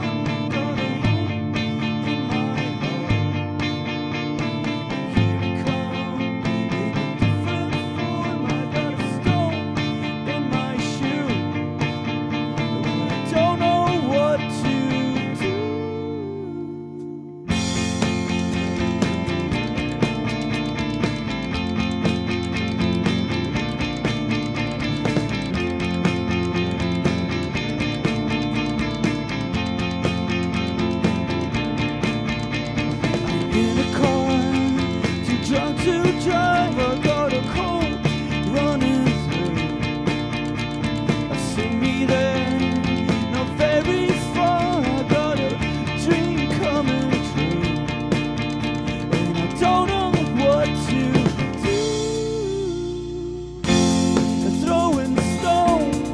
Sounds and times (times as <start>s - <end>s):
Music: 0.0s - 56.1s.